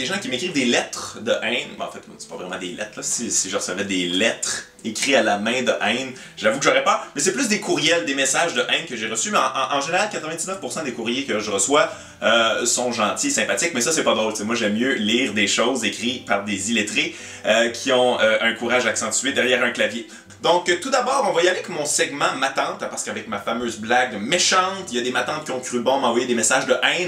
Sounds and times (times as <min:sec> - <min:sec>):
Music: 0:00.0 - 0:27.0
Speech: 0:00.0 - 0:27.0.